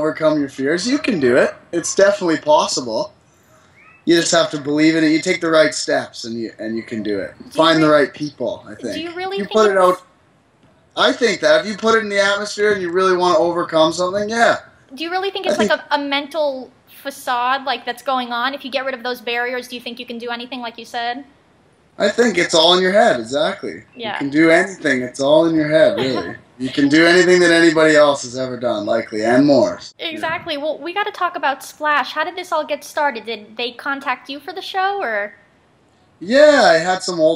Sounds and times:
Speech: 0:00.0 - 0:03.1, 0:04.1 - 0:10.0, 0:11.0 - 0:21.2, 0:22.0 - 0:35.3, 0:36.2 - 0:37.3.

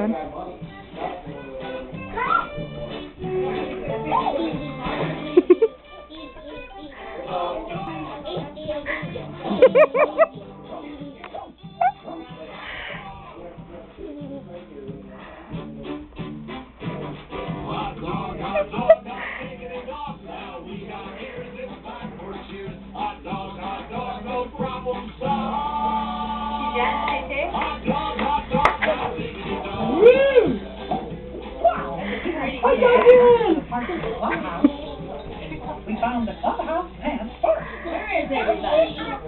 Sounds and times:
Music: 0:00.0 - 0:39.2.

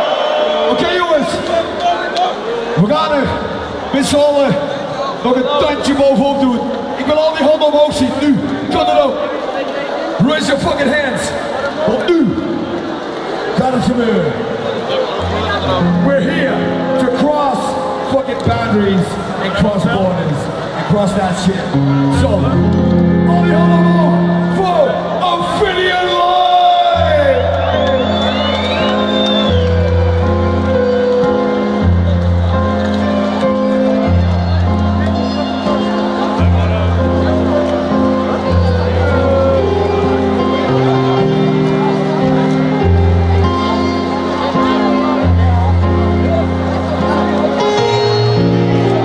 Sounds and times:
Music: 0:00.0 - 0:49.0
Speech: 0:04.0 - 0:12.4, 0:13.6 - 0:22.6.

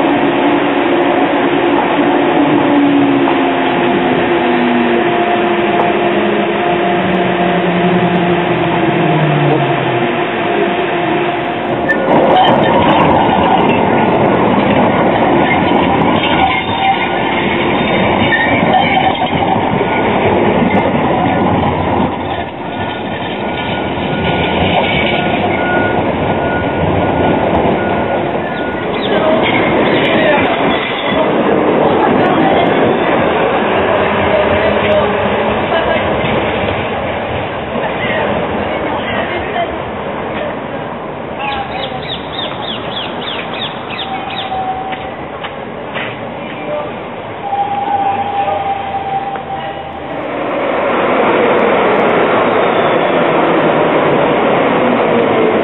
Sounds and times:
Train: 0:00.0 - 0:55.6.

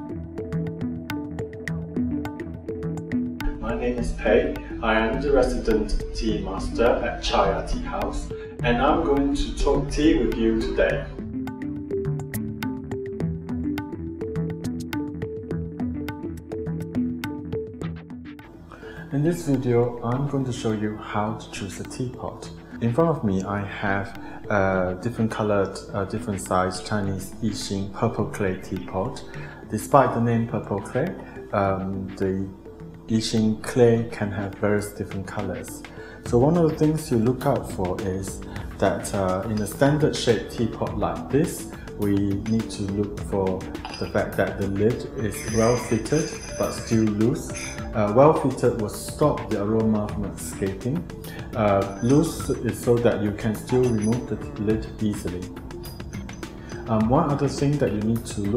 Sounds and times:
Music: 0:00.0 - 0:58.5
Speech: 0:03.6 - 0:11.2, 0:19.1 - 0:55.5, 0:56.9 - 0:58.5.

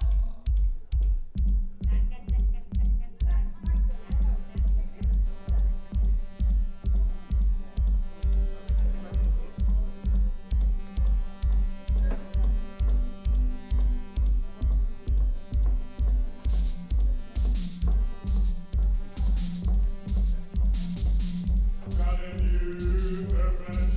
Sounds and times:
Music: 0:00.0 - 0:23.9
Speech: 0:01.9 - 0:06.2, 0:08.3 - 0:10.8, 0:21.9 - 0:23.9.

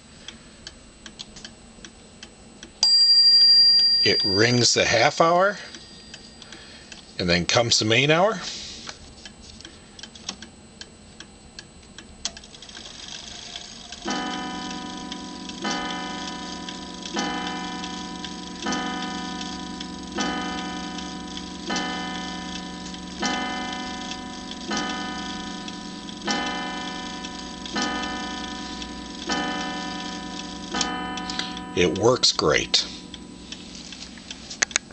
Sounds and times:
Tick-tock: 0:13.5 - 0:34.8.

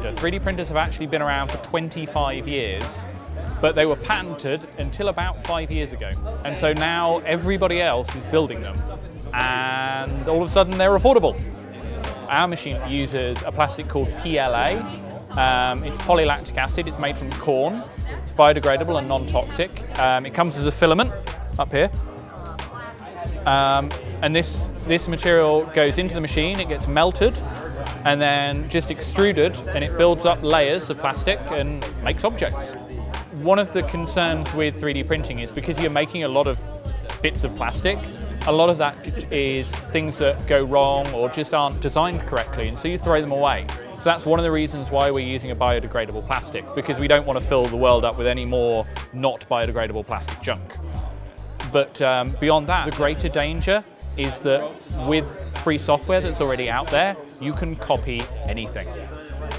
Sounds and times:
Music: 0:00.0 - 0:59.5
Speech: 0:00.0 - 0:59.5.

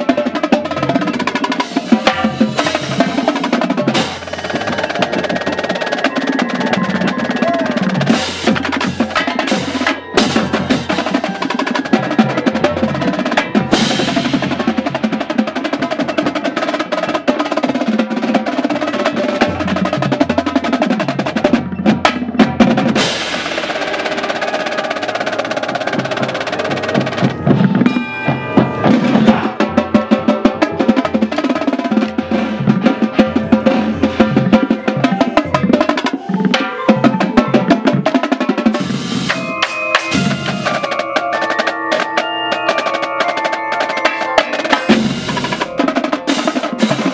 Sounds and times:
Music: 0:00.0 - 0:47.1.

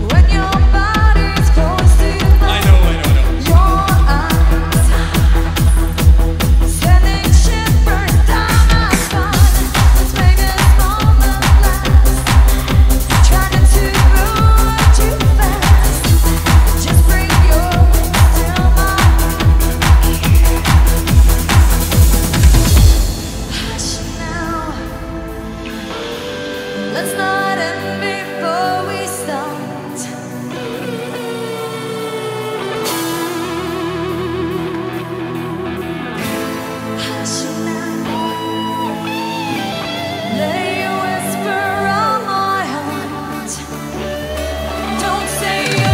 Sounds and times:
Drum kit: 0:00.0 - 0:28.2, 0:44.1 - 0:45.9.

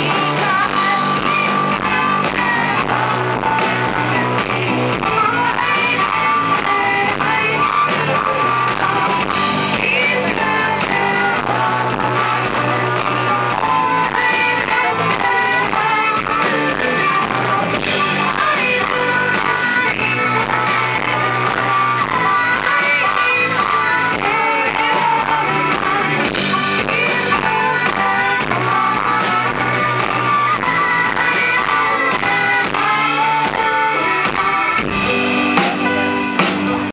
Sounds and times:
Female singing: 0:00.0 - 0:36.6
Music: 0:00.0 - 0:36.9.

